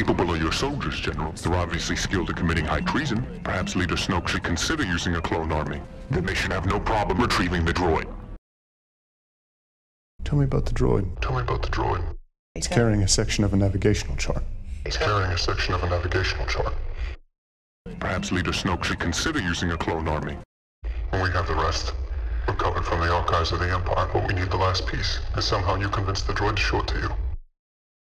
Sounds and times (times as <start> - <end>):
Speech: 0.0 - 8.1, 10.2 - 17.2, 17.9 - 27.2.